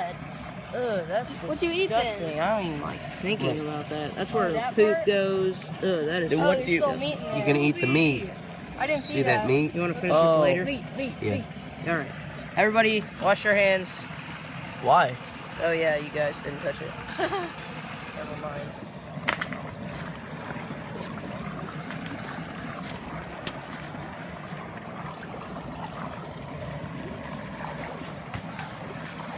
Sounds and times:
Outside, rural or natural: 0.0s - 29.3s.

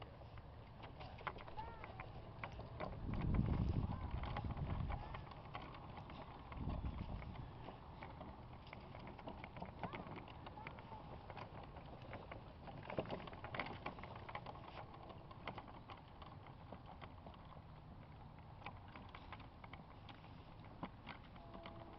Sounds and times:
Clip-clop: 0.0s - 21.9s.

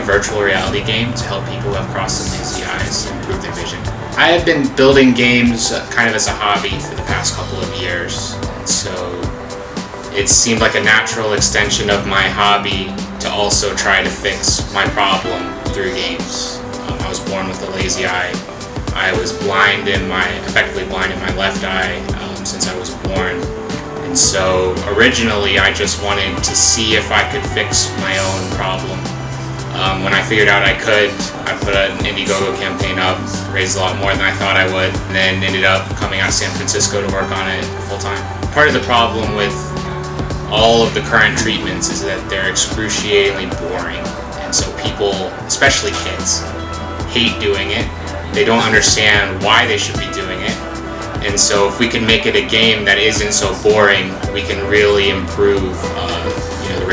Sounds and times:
Speech: 0.0s - 9.3s, 10.1s - 29.1s, 29.7s - 39.8s, 40.5s - 56.9s
Inside, small room: 0.0s - 56.9s
Music: 0.0s - 56.9s.

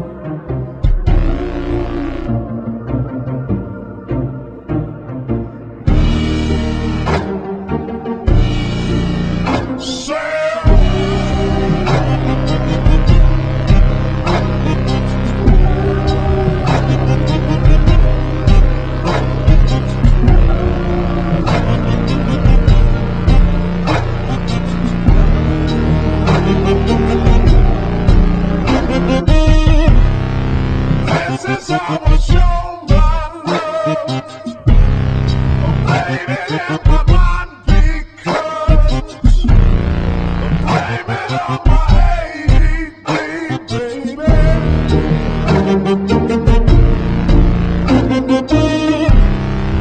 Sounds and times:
Music: 0.0s - 49.8s.

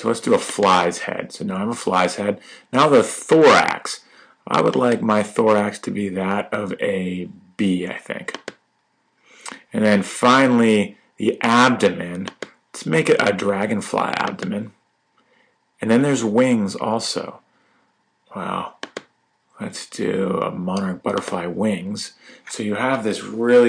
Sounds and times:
Speech: 0.0s - 8.4s, 9.5s - 14.8s, 15.8s - 17.4s, 18.3s - 18.8s, 19.6s - 23.6s.

